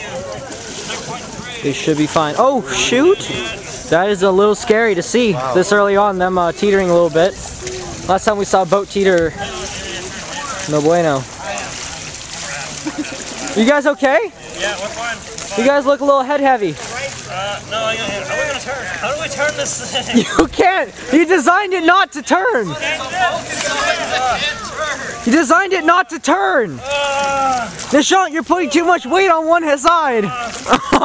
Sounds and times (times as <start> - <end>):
Boat, Water vehicle: 0.0 - 31.0.